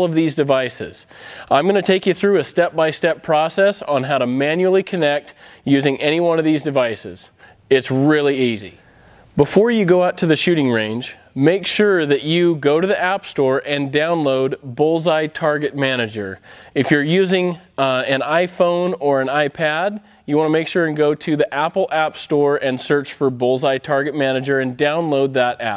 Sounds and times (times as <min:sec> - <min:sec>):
Speech: 0:00.0 - 0:08.8, 0:09.4 - 0:25.7.